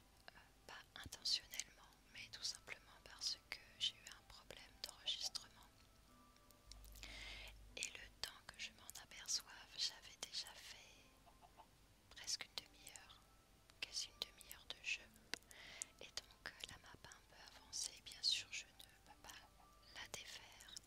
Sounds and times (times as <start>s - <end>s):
Whispering: 0.3s - 5.7s, 7.8s - 11.1s, 12.1s - 13.2s, 13.8s - 15.1s, 16.0s - 20.8s.